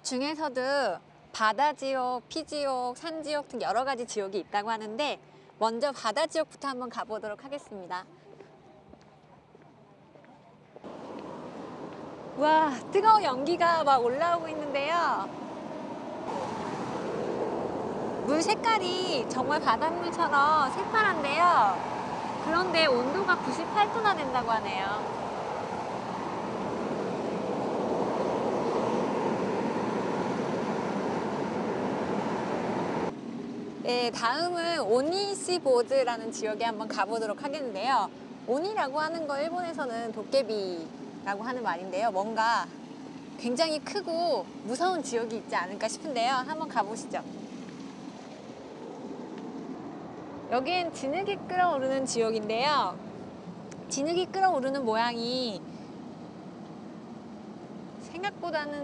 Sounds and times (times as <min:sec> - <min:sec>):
Ocean: 0:10.8 - 0:58.8.